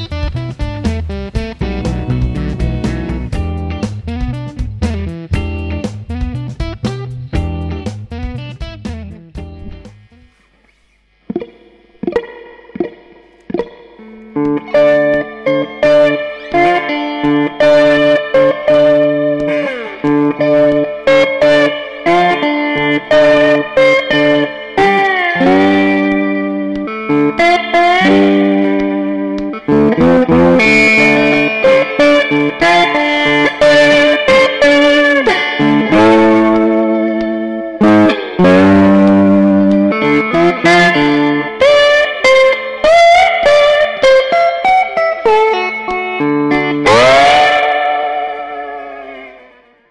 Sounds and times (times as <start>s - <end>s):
Guitar: 0.0s - 49.9s.